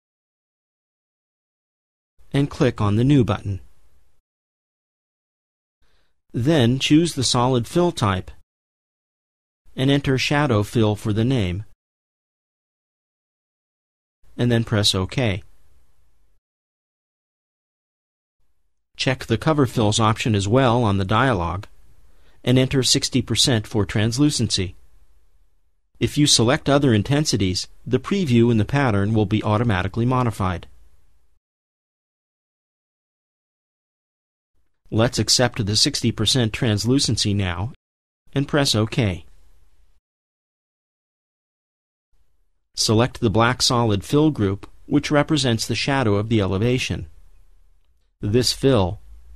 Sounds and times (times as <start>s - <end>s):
Speech: 2.3s - 3.7s, 6.3s - 8.4s, 9.8s - 11.8s, 14.4s - 15.5s, 19.0s - 21.8s, 22.4s - 24.8s, 26.0s - 30.7s, 34.9s - 39.3s, 42.8s - 47.1s, 48.2s - 49.0s.